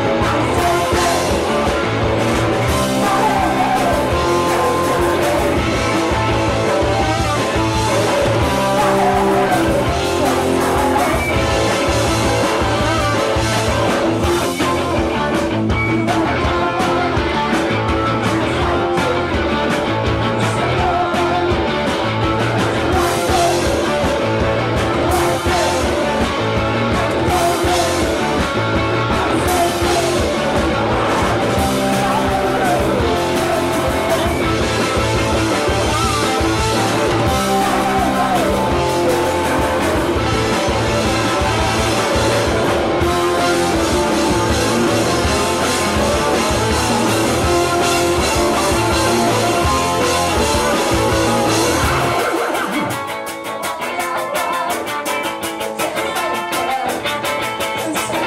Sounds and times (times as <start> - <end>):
Music: 0.0 - 58.2.